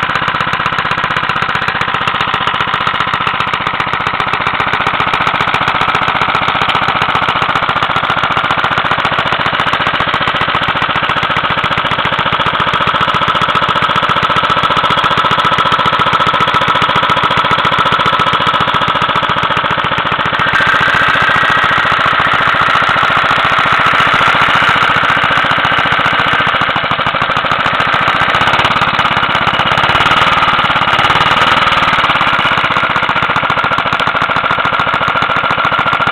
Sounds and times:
Idling: 0:00.0 - 0:36.1
Medium engine (mid frequency): 0:00.0 - 0:36.1.

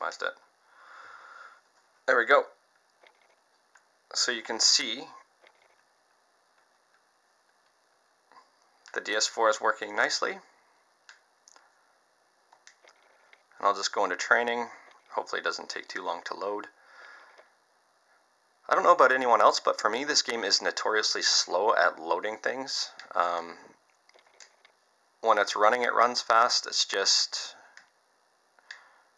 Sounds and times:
Speech: 0:00.0 - 0:00.4, 0:02.1 - 0:02.6, 0:04.1 - 0:05.2, 0:08.9 - 0:10.5, 0:13.6 - 0:16.8, 0:18.7 - 0:23.7, 0:25.2 - 0:27.6
Inside, small room: 0:00.0 - 0:29.1.

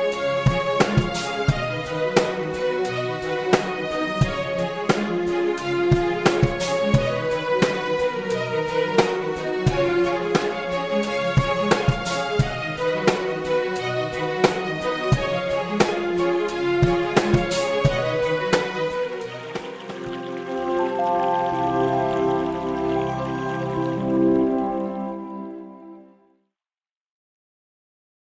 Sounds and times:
Music: 0:00.0 - 0:26.6.

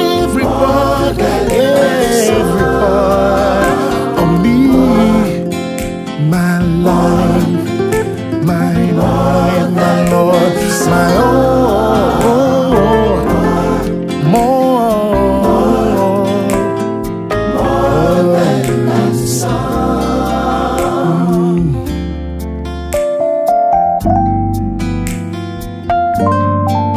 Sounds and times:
Singing: 0:00.0 - 0:05.5, 0:08.4 - 0:16.7, 0:17.5 - 0:21.9
Christmas music: 0:00.0 - 0:26.9.

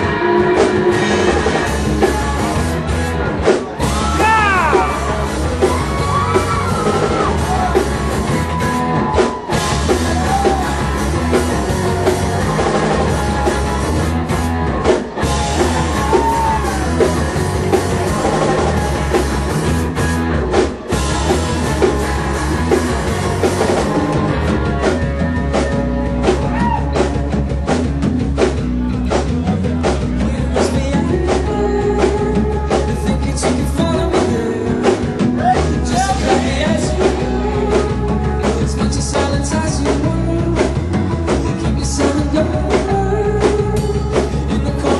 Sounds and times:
Music: 0:00.0 - 0:44.9.

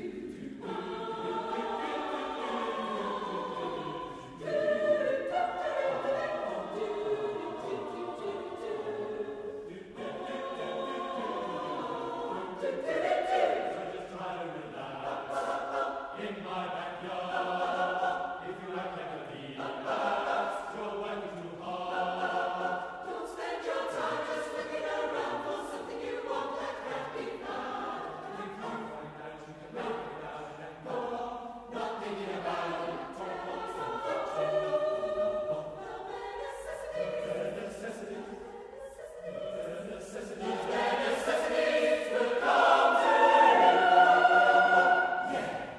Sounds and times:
Choir: 0:00.0 - 0:45.7.

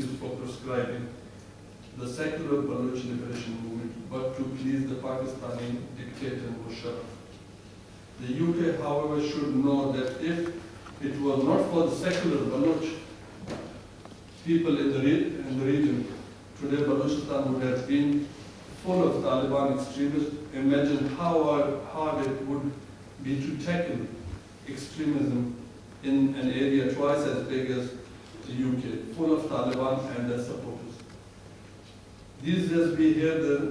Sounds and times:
Male speech, man speaking: 0:00.0 - 0:01.2, 0:02.0 - 0:07.2, 0:08.2 - 0:13.1, 0:14.4 - 0:31.0, 0:32.4 - 0:33.7
Narration, monologue: 0:00.0 - 0:33.7.

